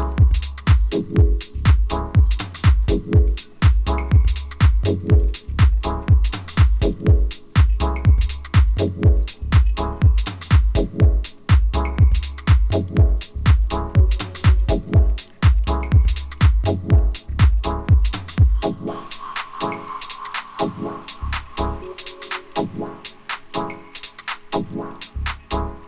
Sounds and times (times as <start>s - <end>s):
Music: 0.0s - 25.8s.